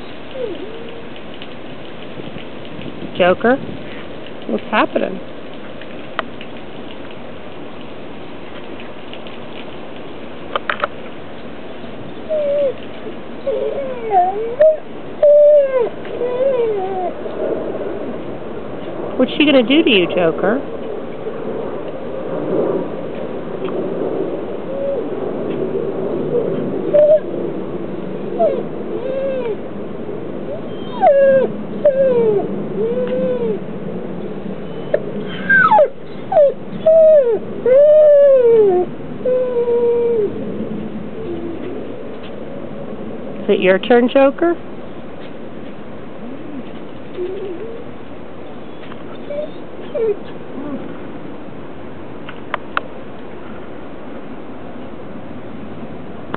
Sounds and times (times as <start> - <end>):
Canidae, dogs, wolves: 0.4 - 1.1, 46.5 - 47.9, 48.6 - 51.0
Speech: 3.2 - 3.6, 4.5 - 5.2, 19.2 - 20.6, 43.5 - 44.6.